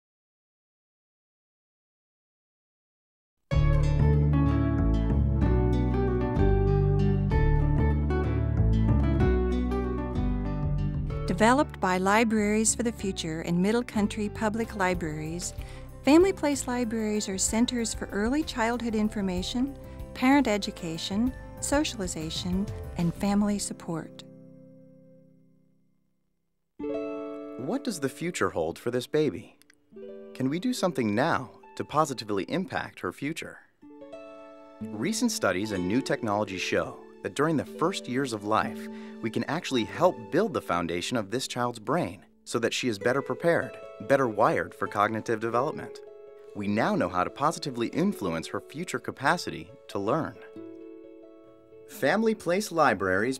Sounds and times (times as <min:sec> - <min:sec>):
Music: 0:03.5 - 0:26.0, 0:26.8 - 0:53.3.